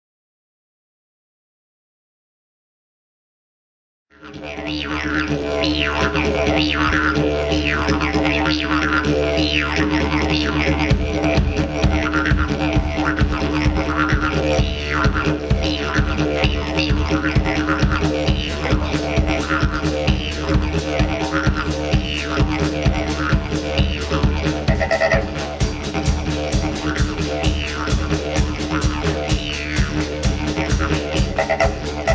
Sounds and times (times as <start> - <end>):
Didgeridoo: 4.1 - 32.1.